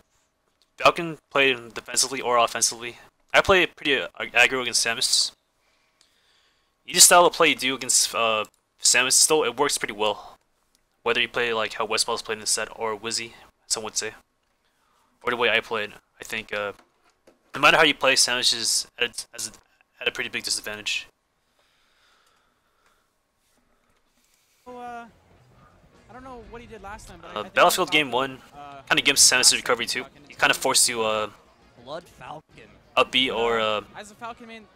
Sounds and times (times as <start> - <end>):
Speech: 0.8 - 5.4, 6.9 - 10.4, 11.1 - 14.2, 15.2 - 16.8, 17.6 - 21.1, 26.1 - 34.7.